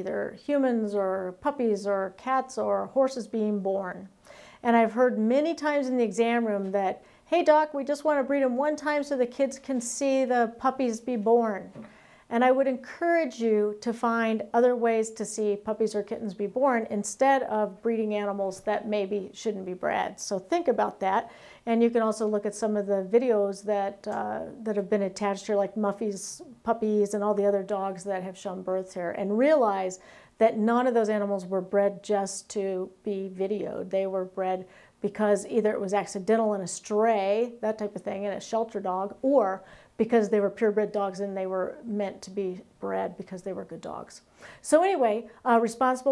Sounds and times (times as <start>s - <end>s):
Speech: 0.0s - 46.1s.